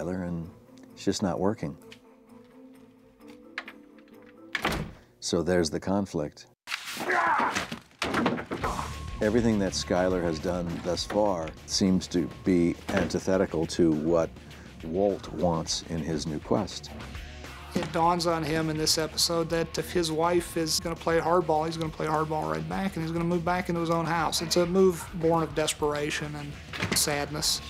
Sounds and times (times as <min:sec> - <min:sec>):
Speech: 0:00.0 - 0:01.8, 0:05.2 - 0:06.5, 0:09.2 - 0:16.9, 0:17.8 - 0:27.6
Music: 0:00.0 - 0:05.0, 0:08.6 - 0:27.6.